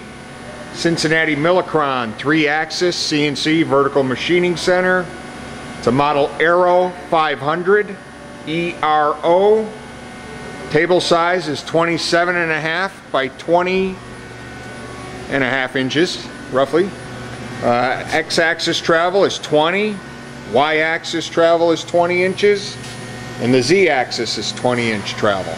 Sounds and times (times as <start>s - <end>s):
Speech: 0.6s - 5.1s, 5.8s - 9.8s, 10.7s - 14.0s, 15.3s - 17.0s, 17.6s - 22.8s, 23.4s - 25.5s.